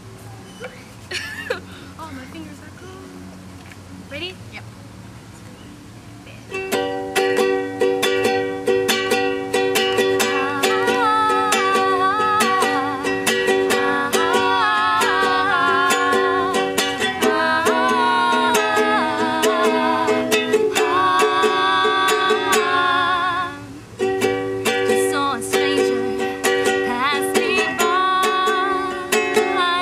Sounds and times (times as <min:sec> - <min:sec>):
Music: 0:05.7 - 0:29.8.